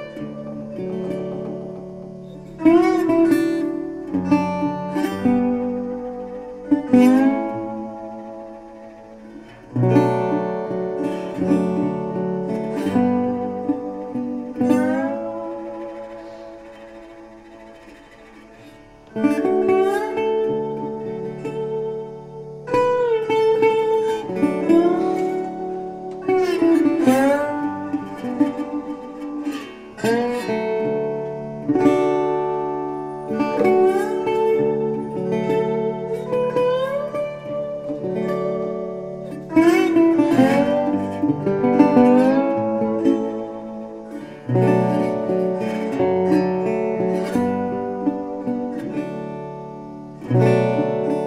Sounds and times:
Acoustic guitar: 0:00.0 - 0:51.2.

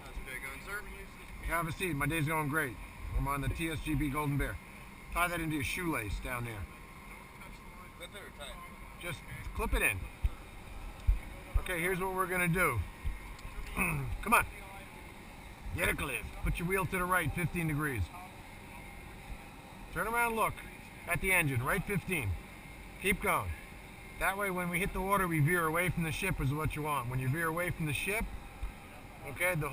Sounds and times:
Speech: 0:00.0 - 0:04.6, 0:15.8 - 0:18.4, 0:20.0 - 0:22.4, 0:24.2 - 0:28.3, 0:29.1 - 0:29.7.

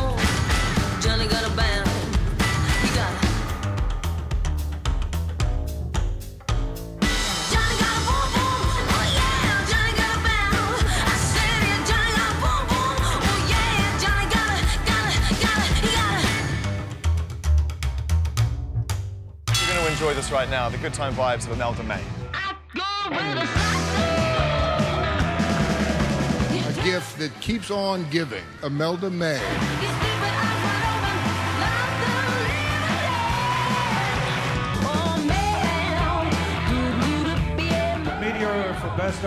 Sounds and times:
Music: 0:00.0 - 0:39.2.

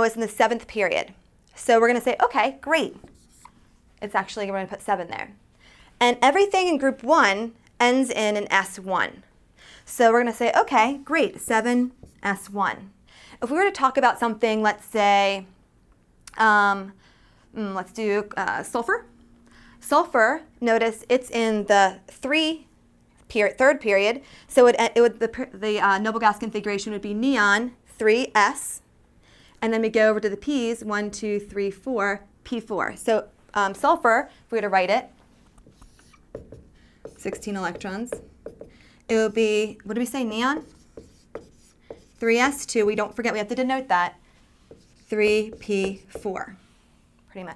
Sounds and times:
Speech: 0:00.0 - 0:03.0, 0:04.0 - 0:05.4, 0:09.9 - 0:15.5, 0:17.6 - 0:19.1, 0:19.8 - 0:22.7, 0:23.3 - 0:28.8, 0:29.6 - 0:35.1, 0:37.2 - 0:38.2, 0:39.1 - 0:40.7, 0:42.2 - 0:44.2, 0:45.0 - 0:46.6, 0:47.3 - 0:47.5.

